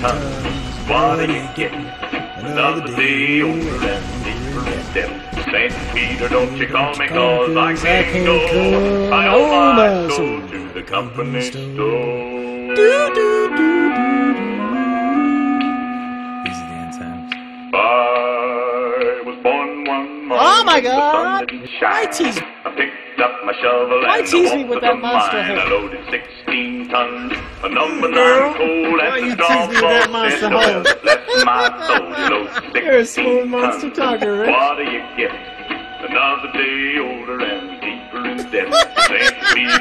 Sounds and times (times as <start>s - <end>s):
Speech: 0.0s - 14.0s, 16.5s - 17.4s, 20.3s - 22.5s, 23.4s - 35.4s, 36.1s - 39.8s
Music: 0.0s - 39.8s.